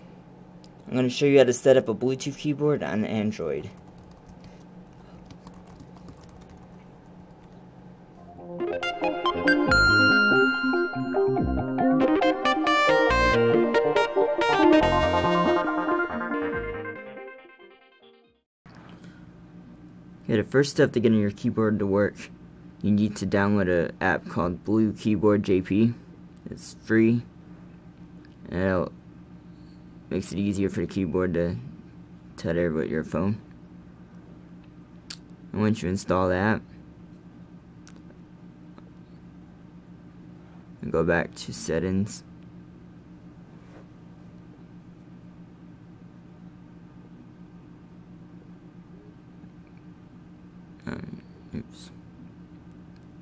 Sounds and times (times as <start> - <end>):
Synthesizer: 8.2 - 17.7.